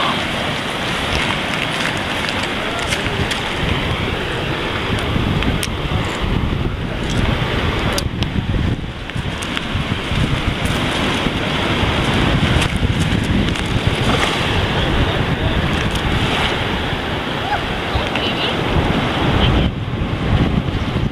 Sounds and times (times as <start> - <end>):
Outside, rural or natural: 0.0 - 21.1.